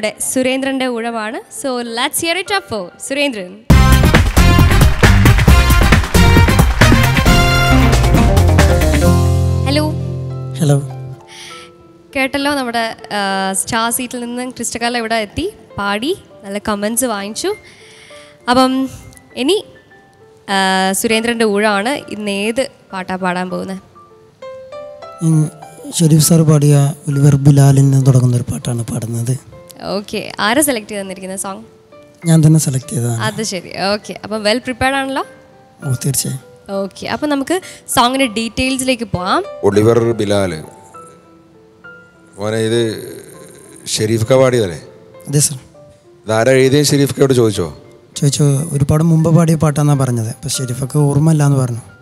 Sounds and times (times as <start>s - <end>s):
Music: 0.0s - 52.0s.